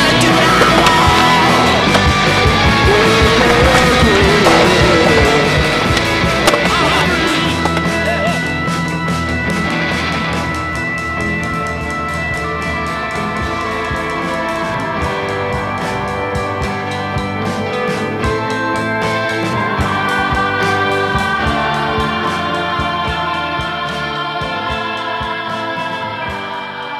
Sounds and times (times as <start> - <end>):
Skateboard: 0.0 - 5.3.